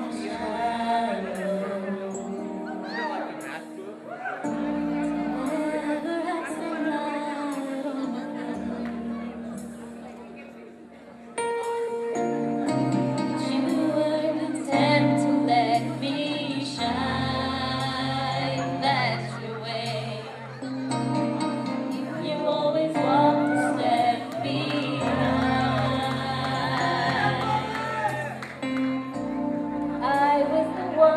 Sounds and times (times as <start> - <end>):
Music: 0.0 - 31.1.